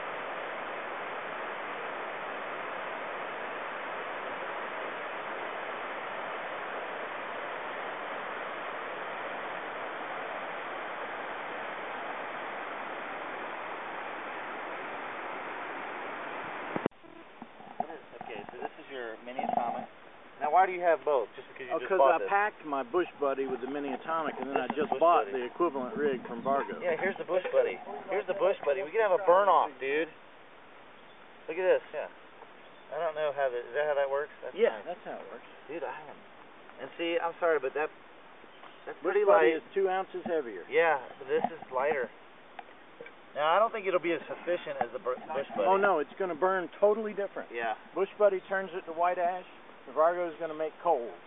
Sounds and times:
Speech: 17.8s - 30.2s, 31.5s - 32.1s, 32.9s - 36.2s, 36.8s - 37.9s, 38.9s - 42.1s, 43.4s - 51.2s.

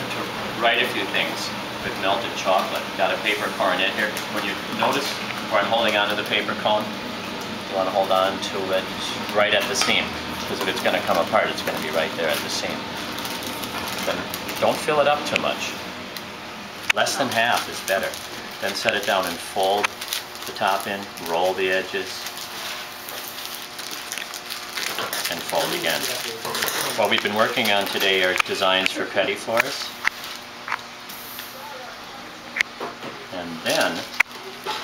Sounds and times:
Speech: 0.1s - 6.9s, 7.7s - 12.8s, 14.0s - 15.8s, 16.9s - 19.9s, 20.5s - 22.2s, 25.3s - 30.0s, 33.2s - 34.1s.

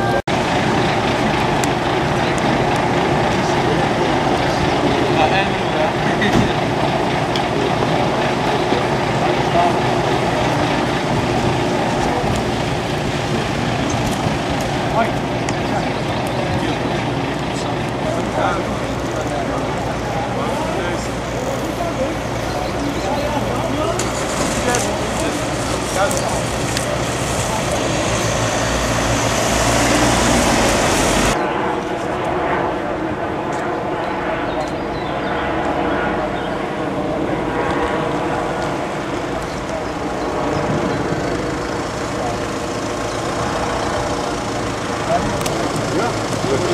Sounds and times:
Car: 0.0s - 31.4s, 37.5s - 46.7s
Truck: 0.0s - 32.2s, 37.8s - 46.7s
Emergency vehicle: 0.0s - 46.7s
Speech: 2.0s - 28.2s, 45.0s - 46.7s.

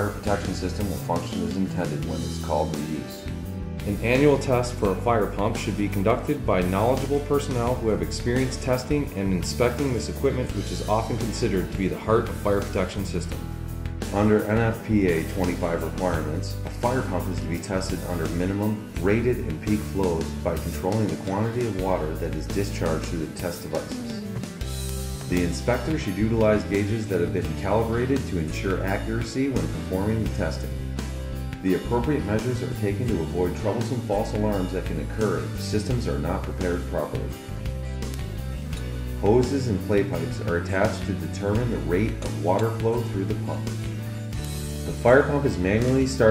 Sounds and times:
Speech: 0.0s - 3.2s, 3.8s - 13.4s, 14.1s - 24.5s, 25.3s - 30.8s, 31.6s - 37.4s, 39.2s - 43.8s, 44.9s - 46.3s
Music: 0.0s - 46.3s.

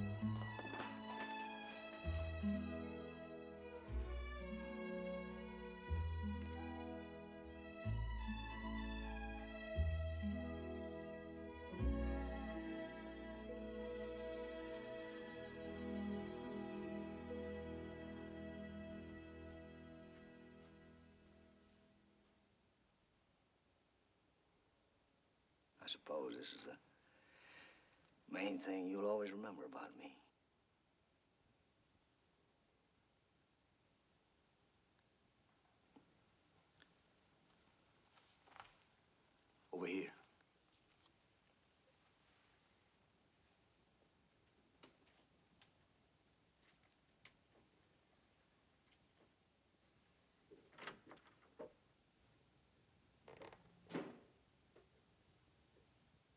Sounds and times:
Speech: 25.8s - 26.9s, 28.3s - 30.3s, 39.7s - 40.3s.

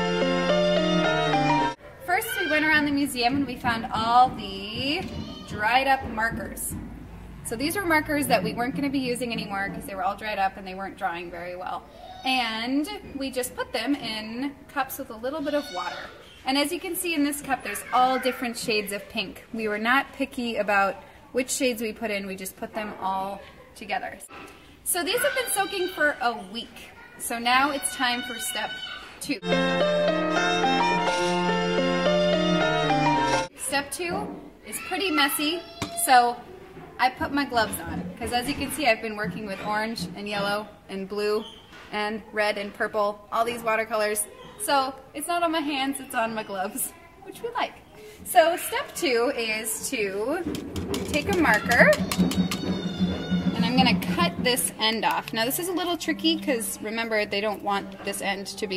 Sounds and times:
Speech: 2.0s - 6.8s, 7.5s - 24.3s, 24.9s - 29.4s, 33.6s - 36.4s, 37.0s - 50.5s, 51.1s - 52.0s, 53.6s - 58.7s.

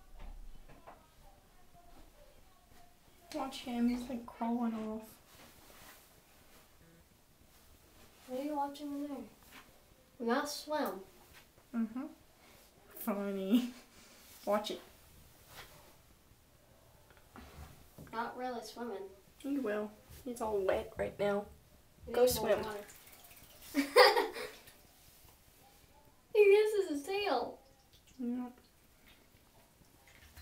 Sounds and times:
Speech: 0.5s - 5.1s, 8.3s - 9.3s, 14.4s - 14.9s, 22.1s - 22.9s, 26.3s - 27.6s.

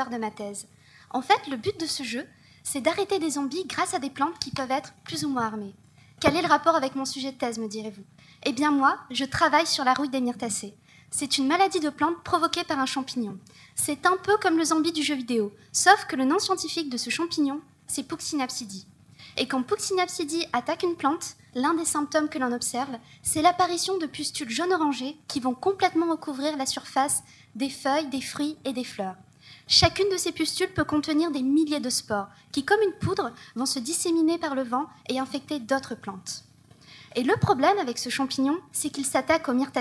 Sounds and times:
Speech: 0.0s - 36.5s, 37.2s - 39.8s.

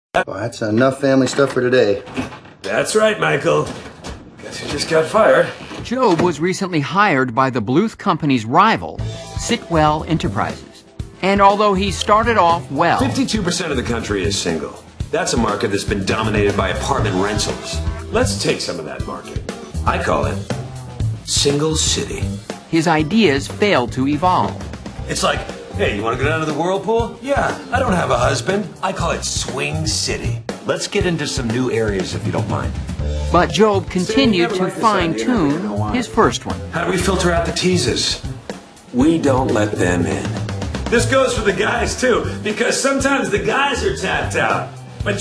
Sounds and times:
Music: 4.4s - 45.2s.

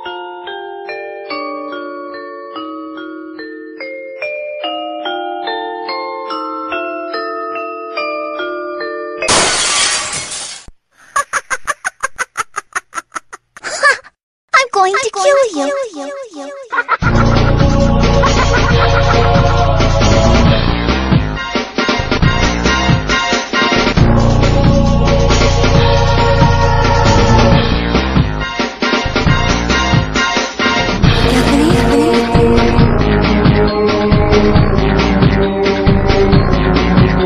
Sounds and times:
Music: 0.0s - 9.2s, 17.0s - 37.2s.

